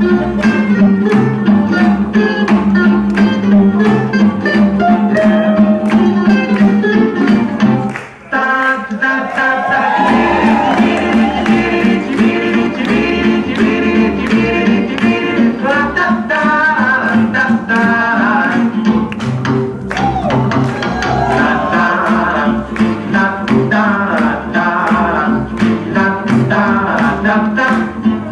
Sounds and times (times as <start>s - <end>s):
Inside, large room or hall: 0.0s - 28.3s
Music: 0.0s - 28.3s.